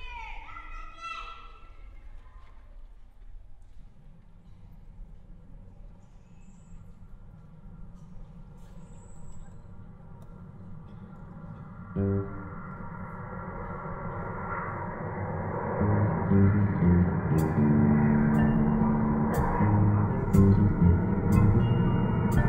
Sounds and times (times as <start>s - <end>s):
Percussion: 17.4s - 22.4s.